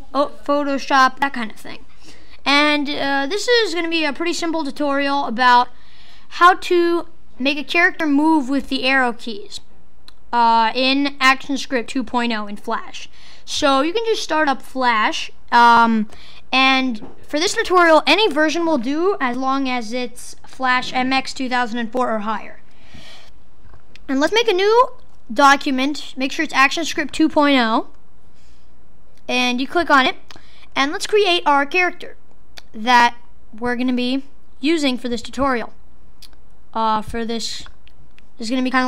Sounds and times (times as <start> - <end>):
Speech: 0.0 - 5.7, 6.3 - 9.7, 10.3 - 22.6, 24.0 - 27.9, 29.3 - 35.8, 36.8 - 37.8, 38.4 - 38.8.